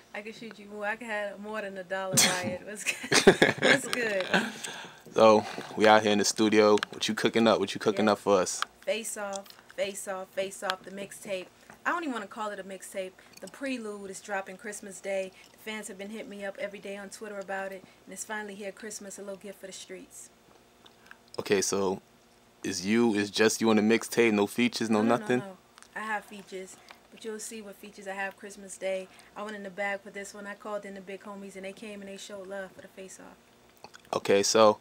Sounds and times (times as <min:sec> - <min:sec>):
Speech: 0:00.2 - 0:02.9, 0:21.4 - 0:22.0, 0:22.7 - 0:33.4, 0:34.1 - 0:34.8.